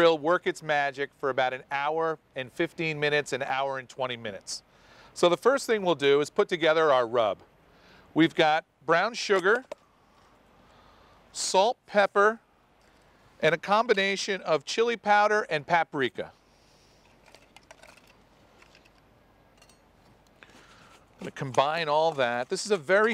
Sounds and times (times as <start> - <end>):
Speech: 0.0 - 4.6, 5.2 - 7.4, 8.2 - 9.7, 11.4 - 12.4, 13.4 - 16.4, 21.2 - 23.1.